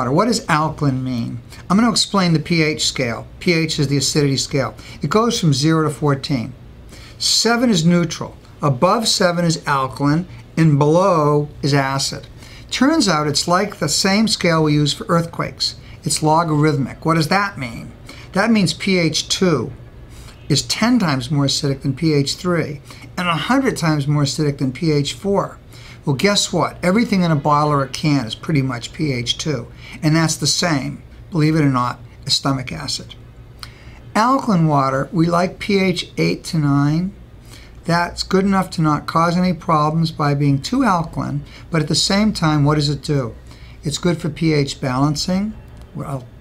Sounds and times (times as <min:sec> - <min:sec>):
Speech: 0:00.0 - 0:06.6, 0:07.2 - 0:19.8, 0:20.5 - 0:33.2, 0:34.1 - 0:37.2, 0:37.8 - 0:46.4.